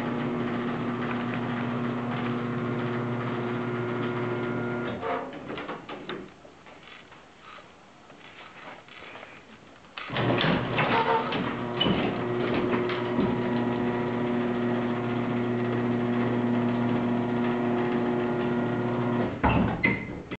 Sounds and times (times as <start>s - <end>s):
Door: 10.0s - 13.8s, 16.2s - 20.3s.